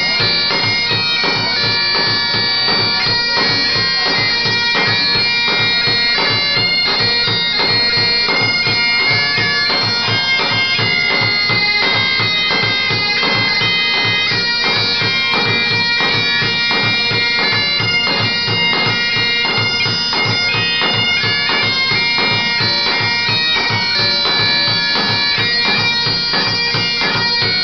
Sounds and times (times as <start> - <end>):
Bagpipes: 0.0 - 27.6
Wind instrument, woodwind instrument: 0.0 - 27.6.